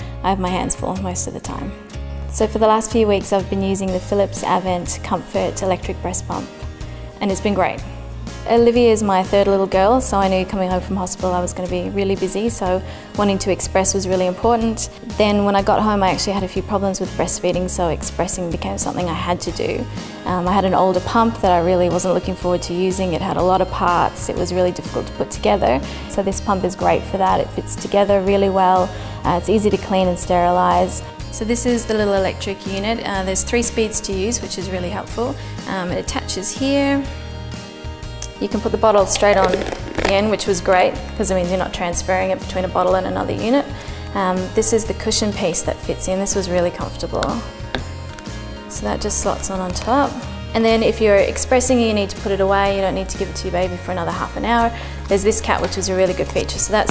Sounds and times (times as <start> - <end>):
Music: 0.0 - 56.9
Speech: 0.3 - 6.5, 7.2 - 7.8, 8.5 - 37.1, 38.3 - 47.4, 48.7 - 56.9.